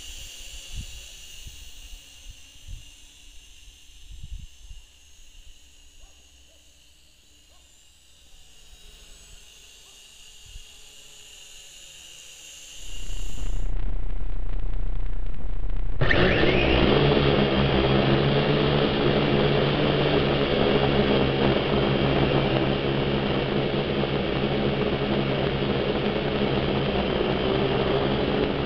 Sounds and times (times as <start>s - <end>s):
Outside, rural or natural: 0.0s - 28.6s.